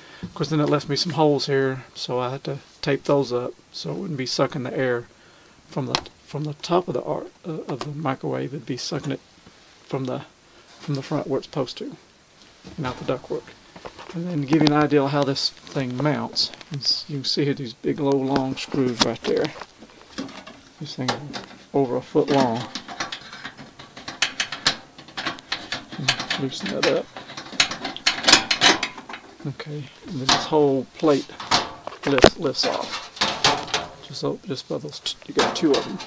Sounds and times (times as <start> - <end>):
Speech: 0.4 - 5.1, 5.7 - 9.2, 9.9 - 12.0, 12.8 - 19.6, 20.8 - 22.7, 26.0 - 27.1, 29.4 - 31.4, 32.0 - 33.0, 34.0 - 36.0.